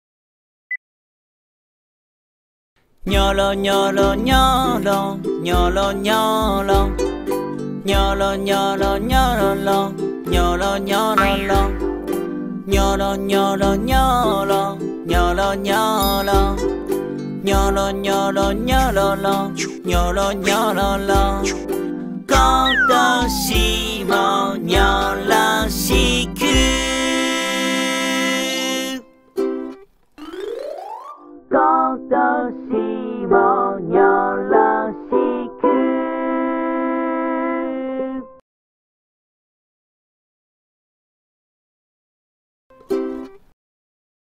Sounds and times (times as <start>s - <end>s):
Music for children: 3.2s - 31.8s.